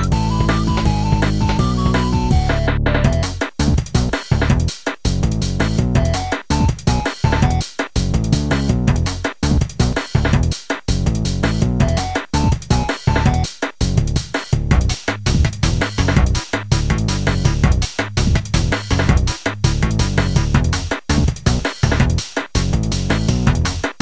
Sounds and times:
Music: 0.0 - 24.0.

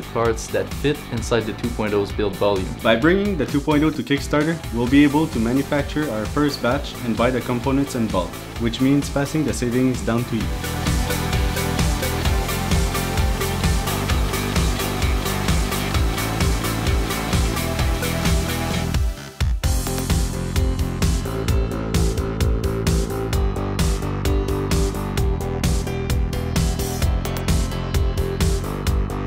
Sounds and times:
Speech: 0.0 - 10.5
Music: 0.0 - 29.2.

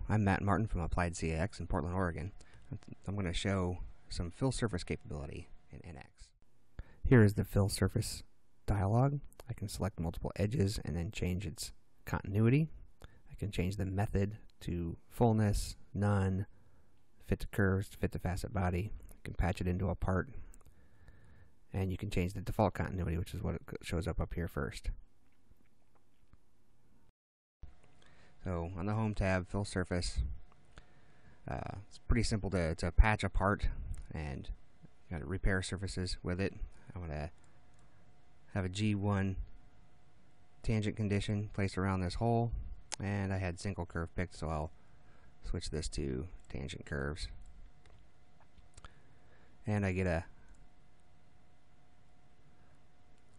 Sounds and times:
Speech: 0.0 - 6.3, 7.0 - 16.5, 17.2 - 20.5, 21.7 - 25.0, 28.4 - 30.4, 31.5 - 37.4, 38.5 - 39.5, 40.6 - 44.8, 45.4 - 47.4, 49.6 - 50.3.

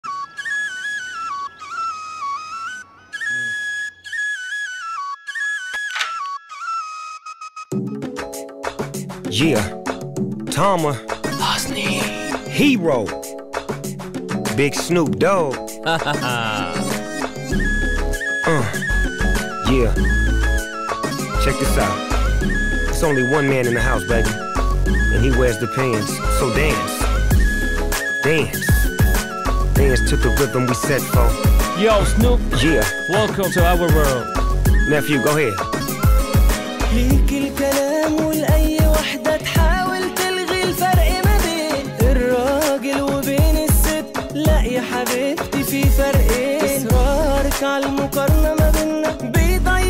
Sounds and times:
Music: 0.0 - 49.8.

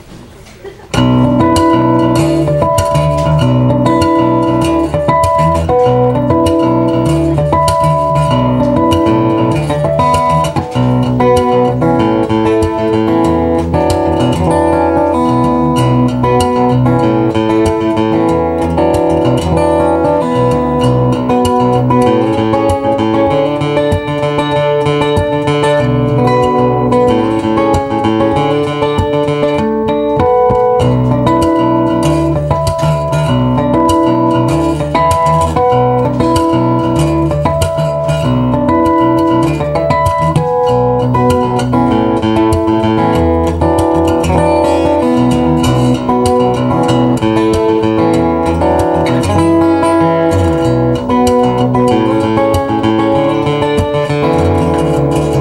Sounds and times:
Acoustic guitar: 0.0 - 55.4
Bowed string instrument: 1.0 - 55.4.

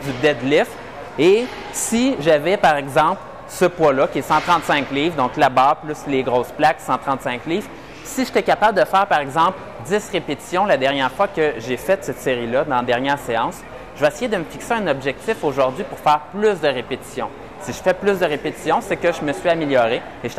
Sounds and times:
Speech: 0.0 - 20.3.

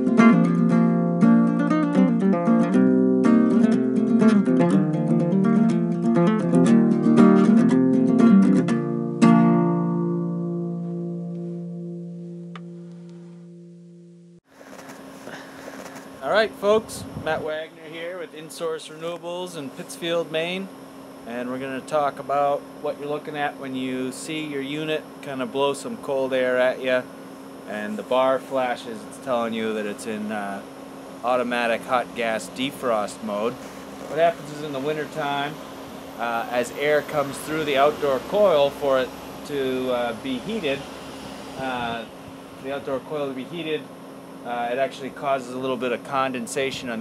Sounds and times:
Speech: 16.2 - 20.7, 21.3 - 27.1, 27.7 - 35.6, 36.2 - 40.8, 41.6 - 43.9, 44.5 - 47.0.

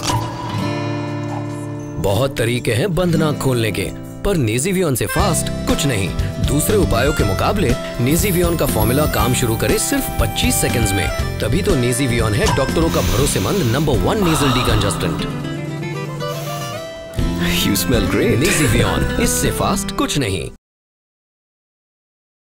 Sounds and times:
Music: 0.0 - 20.6
Speech: 2.0 - 15.4, 17.4 - 20.6.

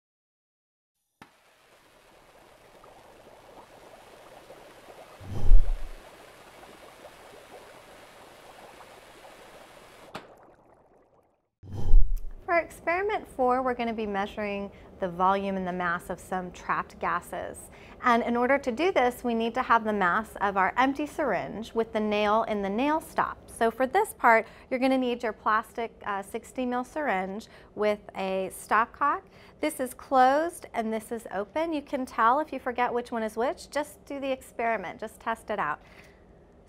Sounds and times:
Speech: 12.5 - 35.8.

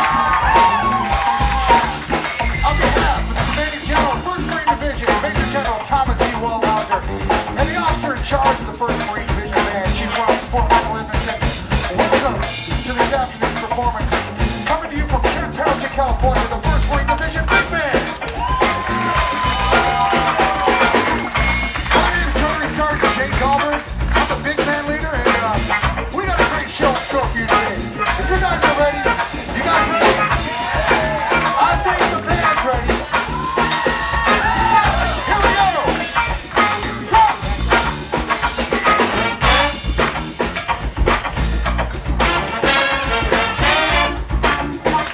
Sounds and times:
Music: 0.0 - 45.1.

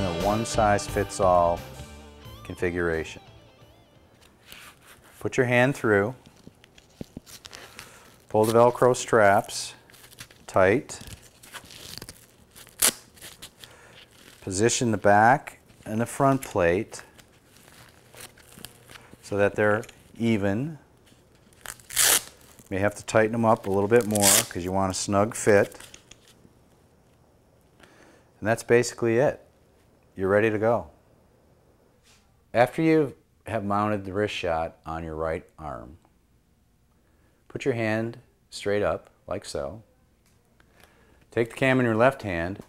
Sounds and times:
Speech: 0.0 - 1.6, 2.5 - 3.2, 5.2 - 6.2, 8.3 - 9.8, 10.5 - 11.1, 14.4 - 17.0, 19.2 - 20.8, 28.4 - 29.4, 30.2 - 30.9, 32.5 - 36.0, 37.5 - 39.9, 41.3 - 42.6.

